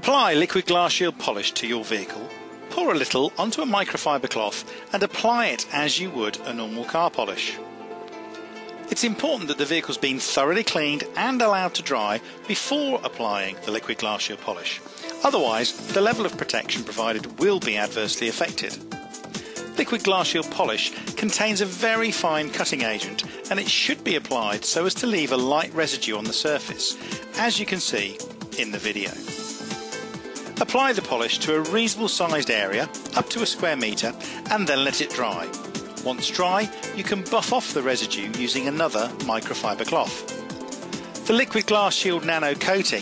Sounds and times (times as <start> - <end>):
Speech: 0.0 - 7.6, 8.9 - 18.8, 19.8 - 29.2, 30.6 - 40.2, 41.3 - 43.0
Music: 0.0 - 43.0.